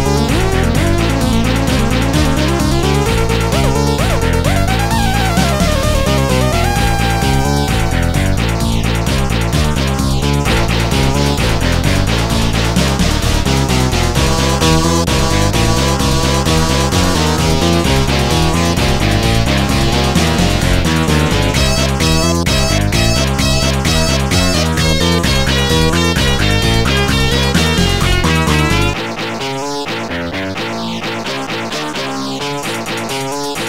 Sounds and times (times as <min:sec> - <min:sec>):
Video game music: 0:00.0 - 0:33.6.